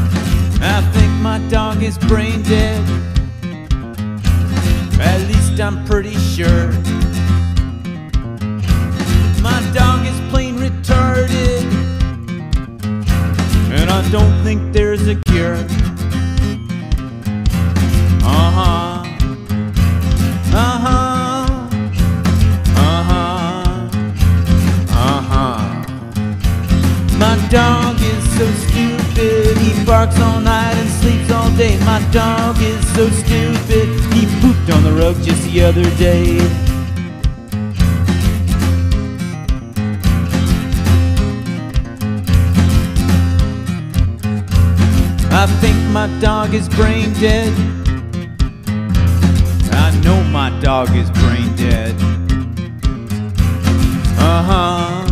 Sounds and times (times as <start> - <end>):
Music: 0.0 - 55.1.